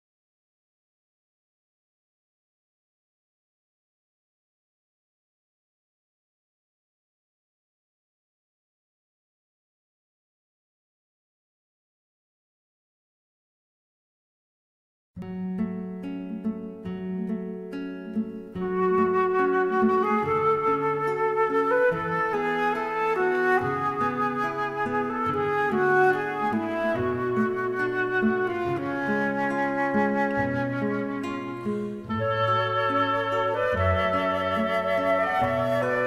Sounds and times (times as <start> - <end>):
Music: 15.2 - 36.0.